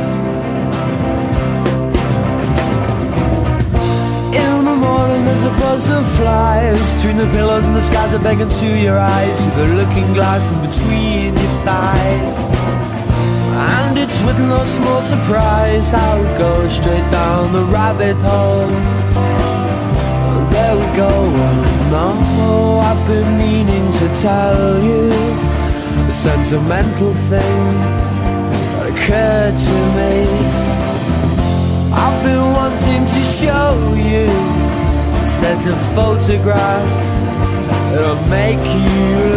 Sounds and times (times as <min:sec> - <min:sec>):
Music: 0:00.0 - 0:39.3.